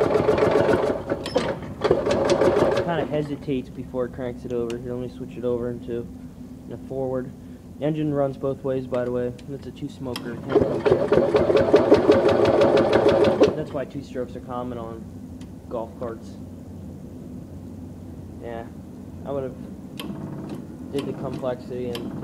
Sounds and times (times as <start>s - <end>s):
Engine: 0.0s - 3.3s, 9.3s - 14.0s, 20.0s - 22.2s
Speech: 2.8s - 6.1s, 6.7s - 10.5s, 13.5s - 15.1s, 15.7s - 16.4s, 18.4s - 19.6s, 20.9s - 22.1s.